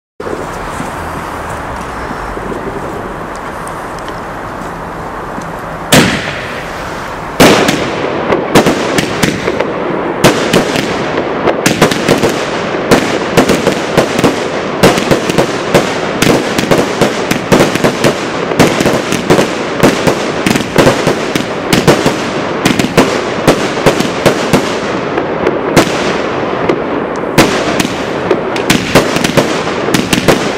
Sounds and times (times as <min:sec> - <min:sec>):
Fireworks: 0:00.2 - 0:30.5.